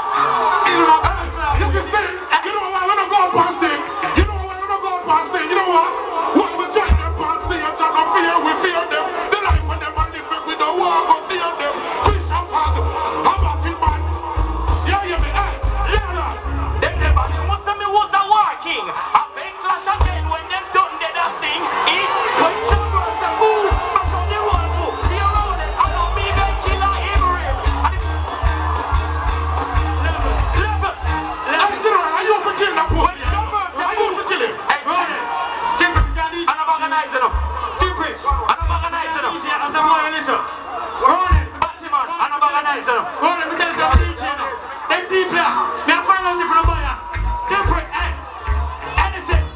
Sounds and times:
Music: 0.0s - 42.4s, 43.1s - 49.5s.

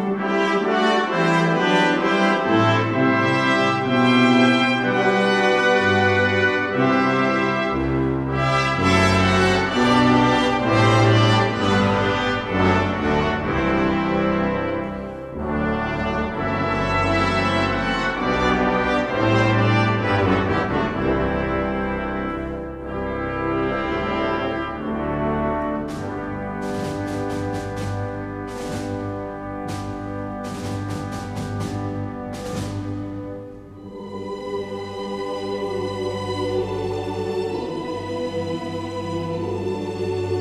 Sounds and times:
Trumpet: 0.0s - 34.3s
French horn: 0.0s - 40.4s.

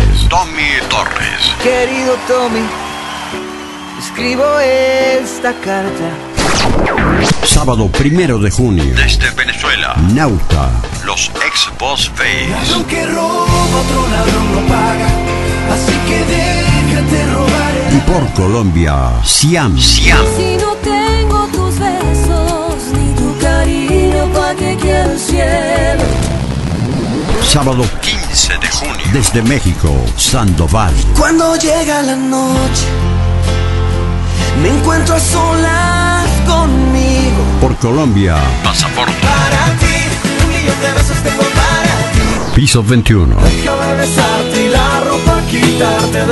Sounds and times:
Speech: 0.0s - 1.7s, 7.5s - 13.0s, 17.9s - 20.4s, 27.4s - 31.2s, 37.6s - 39.2s, 42.6s - 43.5s
Music: 0.0s - 46.3s.

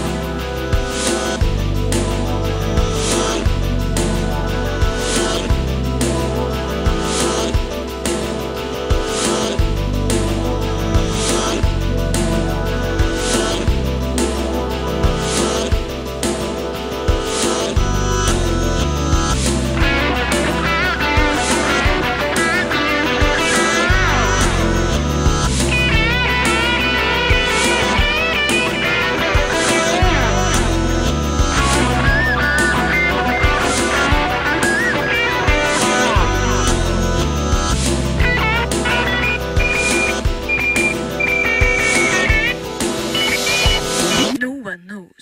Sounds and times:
Background music: 0.0s - 45.2s.

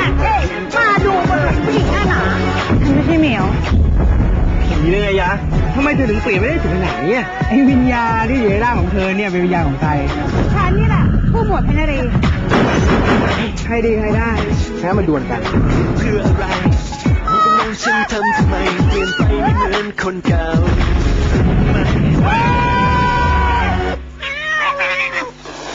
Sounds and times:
Music: 0.0s - 24.2s
Meow: 24.2s - 25.3s.

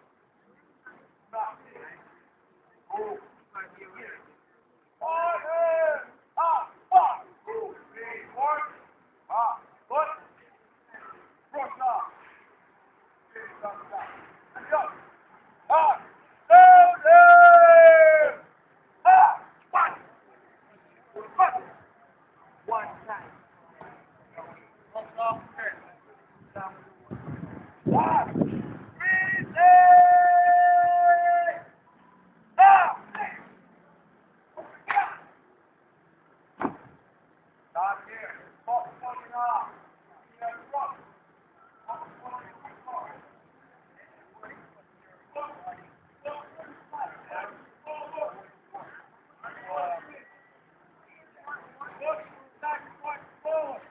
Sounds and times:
Outside, rural or natural: 0.0s - 53.9s.

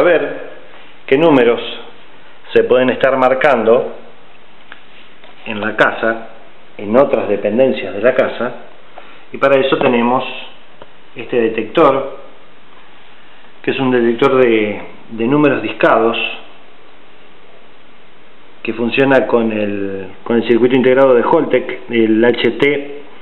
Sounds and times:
Speech: 0.0s - 4.1s, 5.4s - 8.7s, 9.3s - 10.6s, 11.2s - 12.3s, 13.6s - 16.6s, 18.6s - 23.1s.

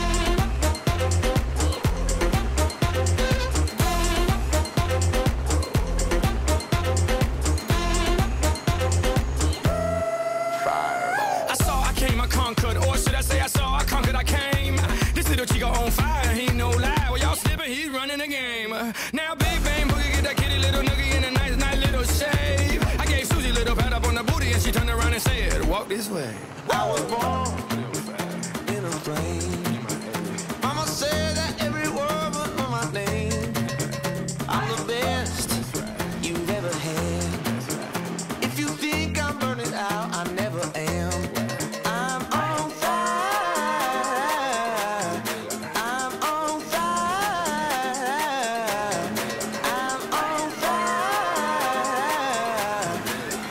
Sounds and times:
Music: 0.0s - 53.5s.

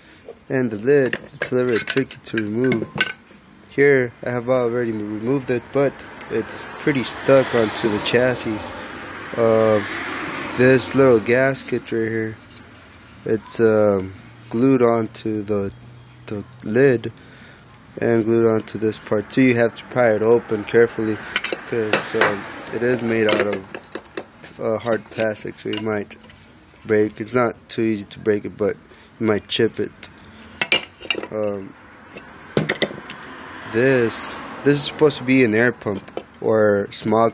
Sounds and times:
Speech: 0.5s - 2.9s, 3.7s - 8.7s, 9.4s - 9.8s, 10.6s - 12.4s, 13.3s - 15.7s, 16.3s - 17.1s, 18.0s - 23.7s, 24.6s - 26.2s, 26.8s - 30.1s, 31.3s - 31.7s, 33.7s - 37.3s.

